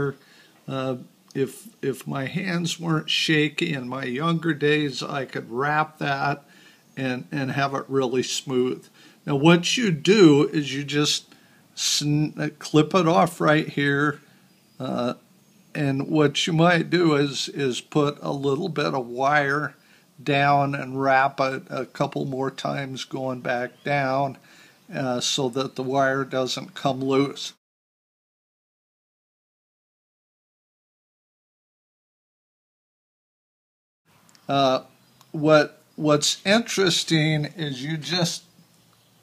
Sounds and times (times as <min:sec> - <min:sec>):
Speech: 0:00.0 - 0:14.2, 0:14.8 - 0:15.2, 0:15.8 - 0:27.6, 0:34.5 - 0:38.5
Inside, small room: 0:00.0 - 0:27.6, 0:34.1 - 0:39.2.